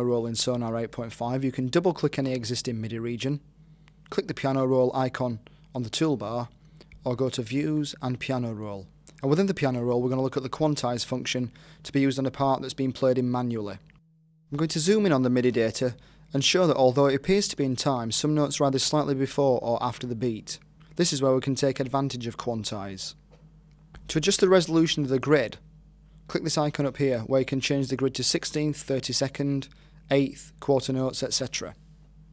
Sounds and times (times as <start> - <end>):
Speech: 0.0 - 3.5, 4.1 - 13.9, 14.6 - 23.2, 24.0 - 25.6, 26.3 - 31.8.